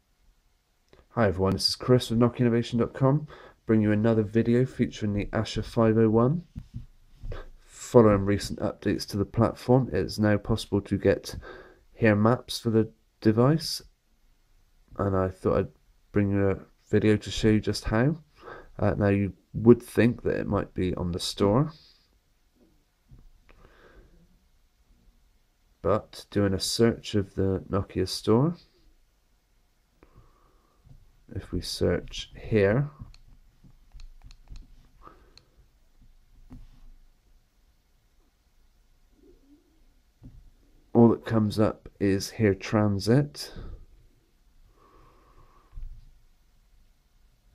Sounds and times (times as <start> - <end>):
Inside, small room: 0.0 - 47.5
Speech: 1.1 - 6.5, 7.7 - 11.4, 12.0 - 13.9, 15.0 - 21.8, 25.8 - 28.7, 31.3 - 33.0, 40.9 - 43.8.